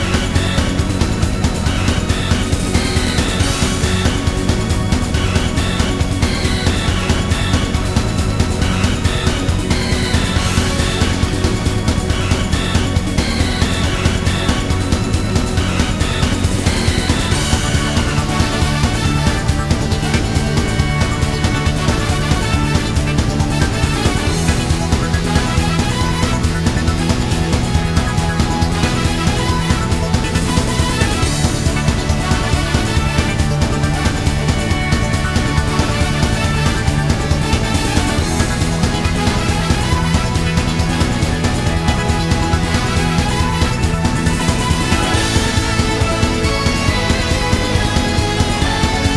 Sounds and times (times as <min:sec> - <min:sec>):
Music: 0:00.0 - 0:49.1.